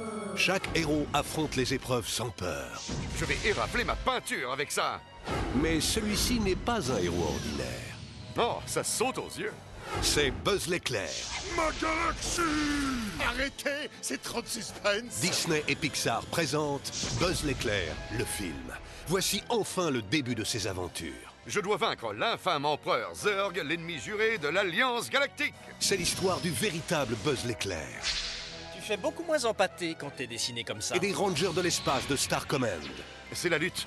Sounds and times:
Speech: 0:00.3 - 0:05.0, 0:05.6 - 0:28.0, 0:28.8 - 0:33.8.

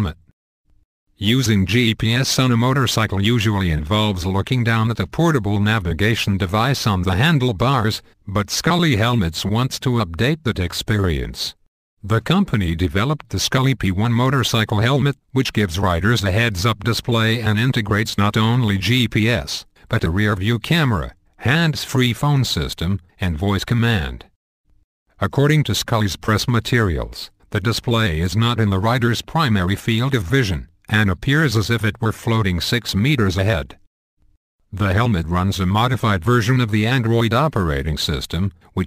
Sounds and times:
Speech: 0:00.0 - 0:00.3, 0:01.2 - 0:24.3, 0:25.2 - 0:33.8, 0:34.7 - 0:38.8.

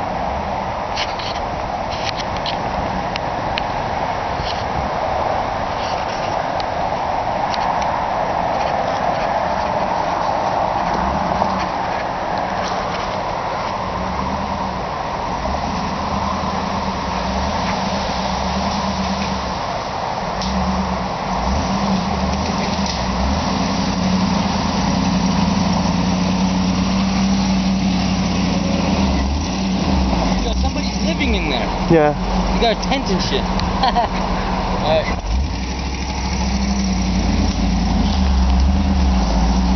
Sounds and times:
Speech: 0:30.4 - 0:33.5, 0:34.8 - 0:35.2.

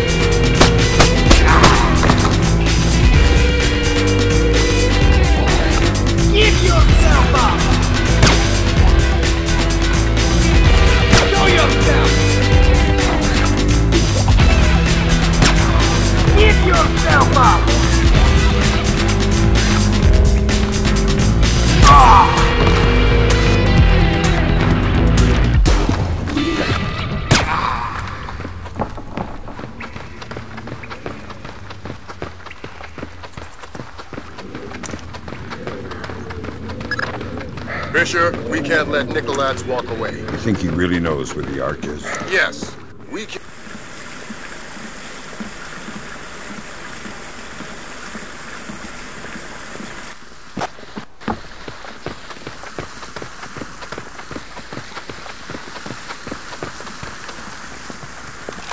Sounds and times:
Rain: 0:00.0 - 0:58.7
Speech: 0:06.3 - 0:07.7, 0:11.3 - 0:12.2, 0:16.4 - 0:17.7, 0:37.9 - 0:43.4.

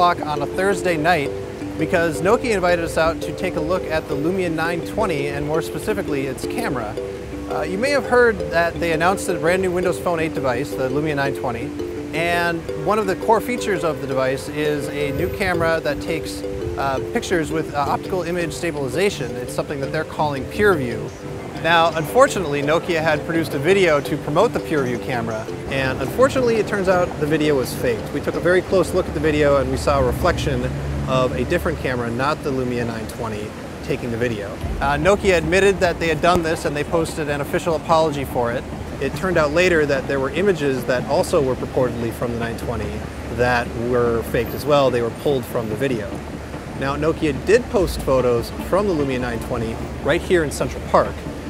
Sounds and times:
Speech: 0:00.0 - 0:46.2, 0:46.8 - 0:51.2
Music: 0:00.0 - 0:51.5.

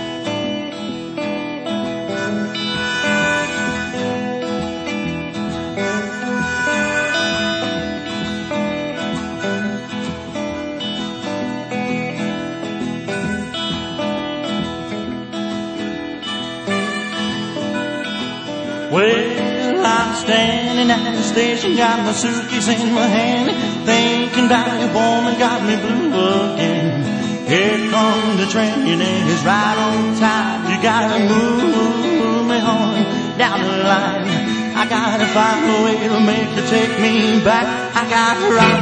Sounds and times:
Music: 0:00.0 - 0:38.8.

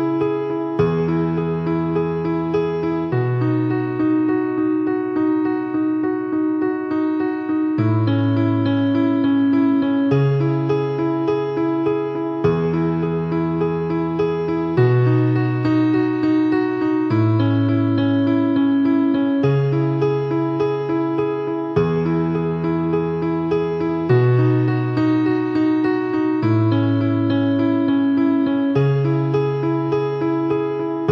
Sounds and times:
Music: 0:00.0 - 0:31.1.

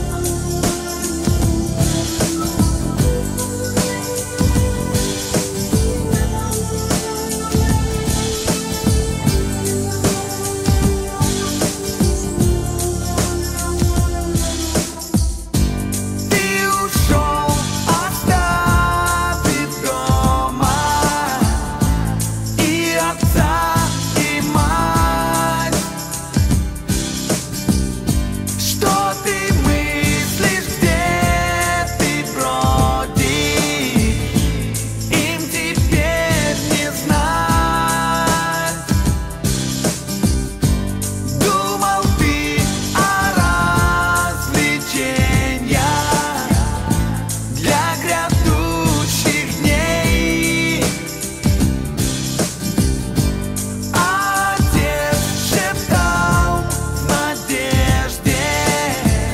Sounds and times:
Music: 0:00.0 - 0:59.3.

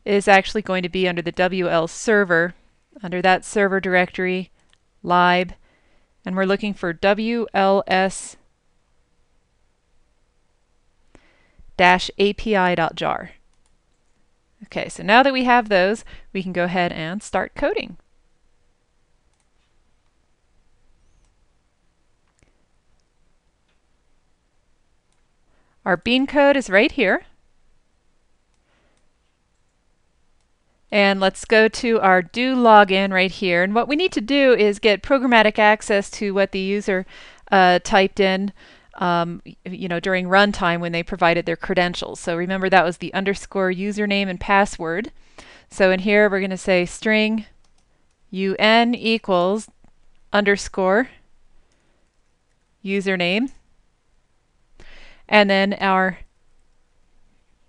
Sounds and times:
Speech: 0:00.0 - 0:04.5, 0:05.1 - 0:05.6, 0:06.3 - 0:08.4, 0:11.8 - 0:13.4, 0:14.6 - 0:18.0, 0:25.9 - 0:27.4, 0:30.9 - 0:45.1, 0:45.7 - 0:47.5, 0:48.4 - 0:49.7, 0:50.4 - 0:51.2, 0:52.9 - 0:53.6, 0:55.3 - 0:56.3.

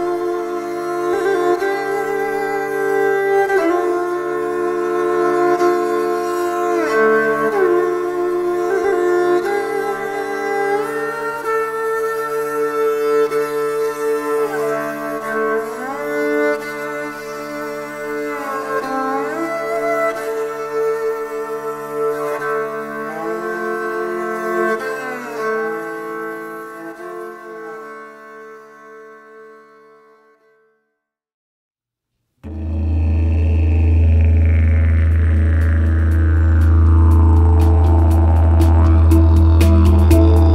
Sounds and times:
Music: 0:00.0 - 0:31.2, 0:32.4 - 0:40.5.

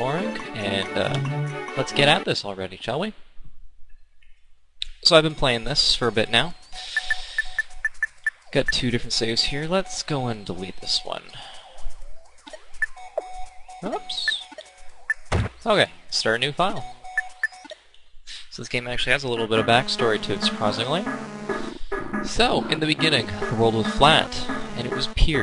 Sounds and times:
Music: 0:00.0 - 0:02.3, 0:19.4 - 0:25.4
Speech: 0:00.0 - 0:03.2, 0:04.8 - 0:06.6, 0:08.6 - 0:11.4, 0:13.8 - 0:14.5, 0:15.6 - 0:16.9, 0:18.5 - 0:21.1, 0:22.3 - 0:25.4.

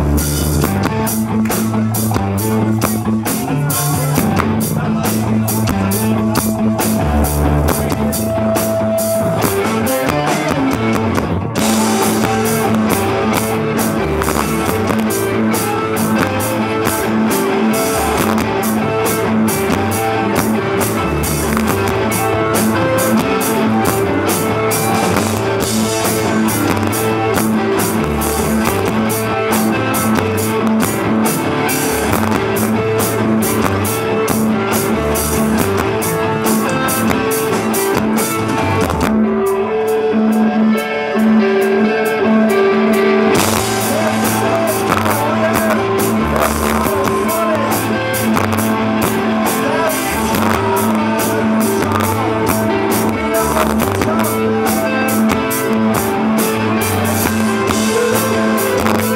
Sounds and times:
Music: 0:00.0 - 0:59.1.

